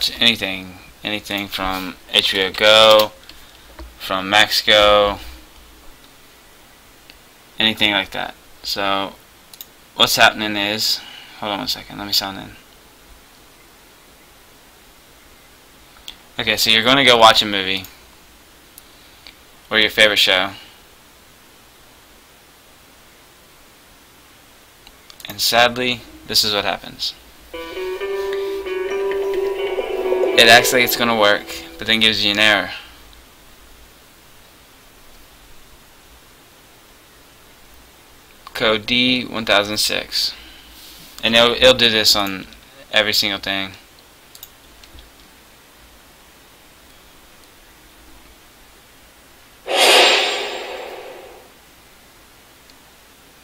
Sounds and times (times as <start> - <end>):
Speech: 0.0 - 3.2, 4.0 - 5.3, 7.6 - 9.2, 10.0 - 12.6, 16.4 - 18.0, 19.7 - 20.6, 25.3 - 27.2, 30.4 - 32.9, 38.5 - 40.4, 41.2 - 43.8
Music: 27.6 - 32.2.